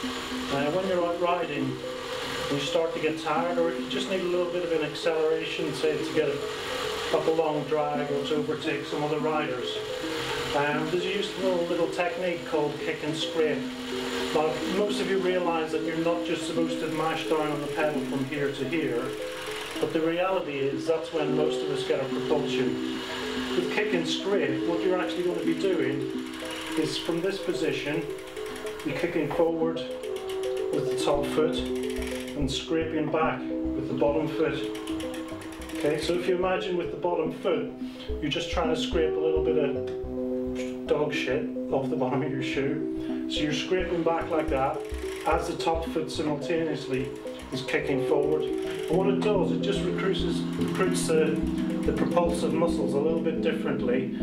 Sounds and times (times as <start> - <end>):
Music: 0.0 - 54.2
Speech: 0.5 - 1.8, 2.5 - 6.4, 7.2 - 9.8, 10.6 - 13.7, 14.4 - 19.2, 19.8 - 22.8, 23.6 - 26.1, 26.8 - 28.1, 28.8 - 29.9, 30.7 - 31.7, 32.4 - 34.8, 35.8 - 39.9, 40.6 - 54.2.